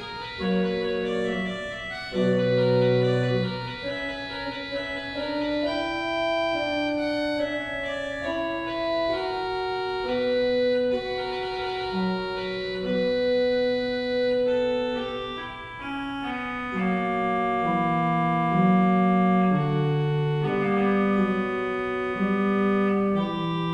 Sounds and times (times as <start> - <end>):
Organ: 0.0 - 23.7
Piano: 0.0 - 23.7.